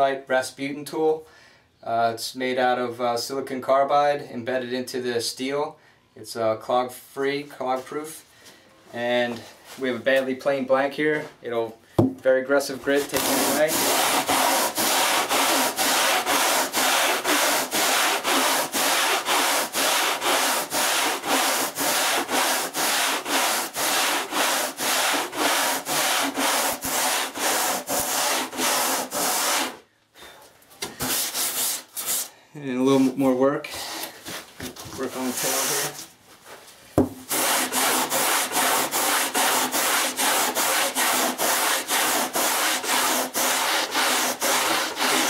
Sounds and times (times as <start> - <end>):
Filing (rasp): 13.0 - 29.8, 31.0 - 32.3, 37.3 - 45.2
Rub: 13.0 - 29.8, 31.0 - 32.3, 35.1 - 36.6, 37.3 - 45.2.